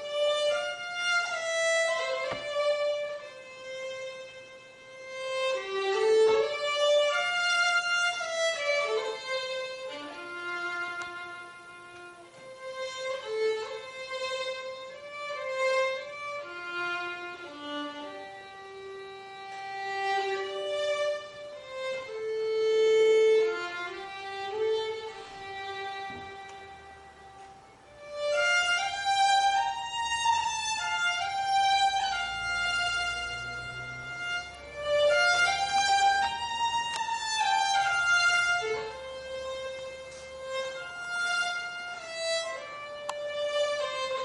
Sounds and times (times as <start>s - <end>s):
Violin, fiddle: 0.0s - 44.2s.